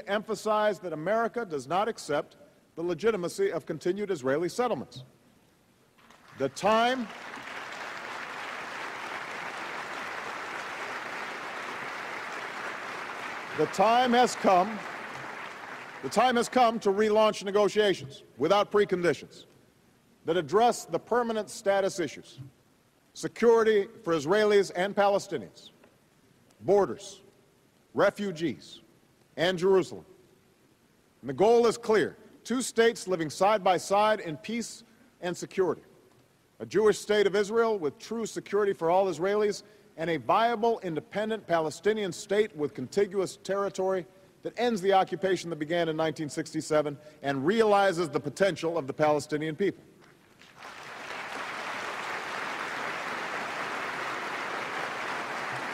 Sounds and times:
Male speech, man speaking: 0:00.0 - 0:05.1, 0:06.4 - 0:07.1, 0:13.6 - 0:14.8, 0:16.1 - 0:19.4, 0:20.3 - 0:22.4, 0:23.2 - 0:25.7, 0:26.7 - 0:27.2, 0:28.0 - 0:28.8, 0:29.4 - 0:30.0, 0:31.3 - 0:35.8, 0:36.6 - 0:49.8
Narration, monologue: 0:00.0 - 0:08.2, 0:12.6 - 0:50.7.

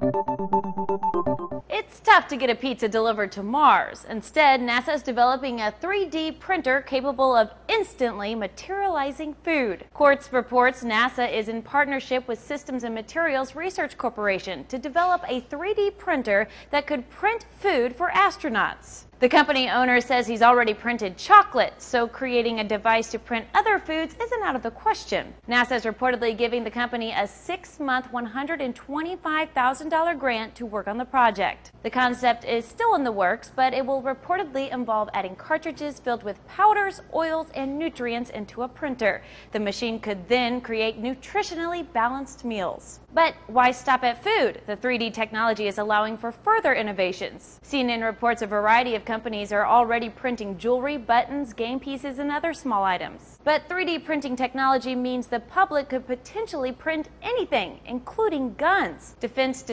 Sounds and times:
Speech: 0:01.7 - 0:59.7.

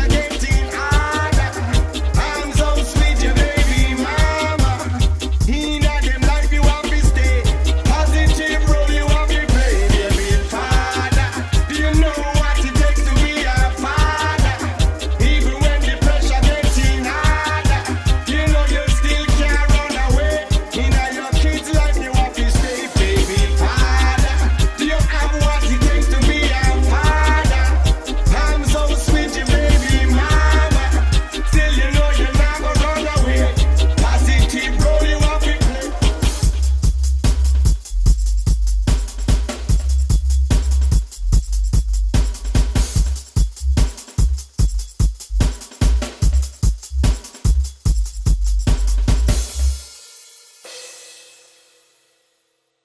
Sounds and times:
Rapping: 0:00.0 - 0:36.6
Pop music: 0:00.0 - 0:37.0
Hip hop music: 0:00.0 - 0:49.8
Reggae: 0:00.0 - 0:52.1.

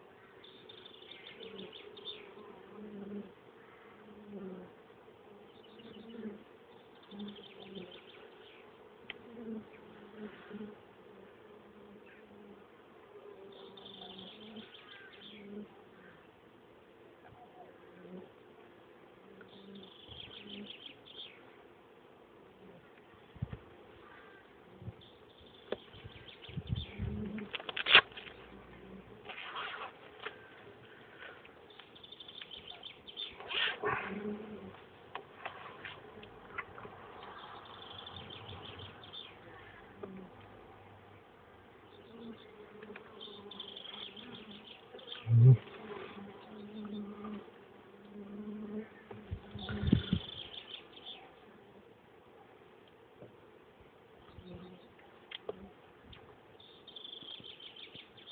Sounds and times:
Insect: 0:00.0 - 0:16.4, 0:19.2 - 0:21.7, 0:22.3 - 0:51.8, 0:54.2 - 0:58.3.

